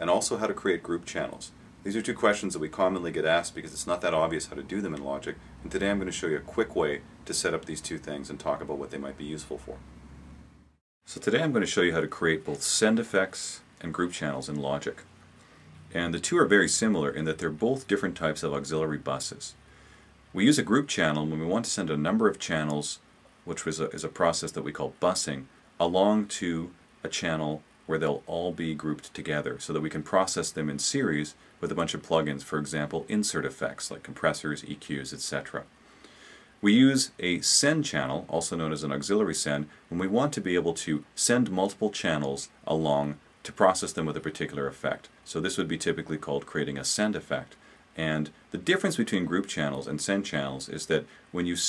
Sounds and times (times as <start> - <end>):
Speech: 0.0 - 9.8, 11.1 - 15.1, 15.9 - 19.6, 20.3 - 35.7, 36.6 - 51.6.